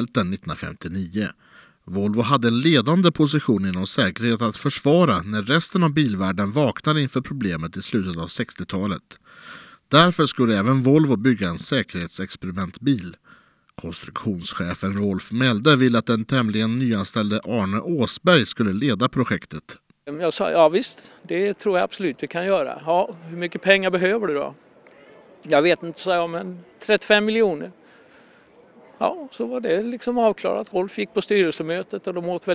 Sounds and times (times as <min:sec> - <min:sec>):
Speech: 0:00.0 - 0:09.2, 0:09.9 - 0:13.2, 0:13.8 - 0:27.8, 0:28.8 - 0:32.5.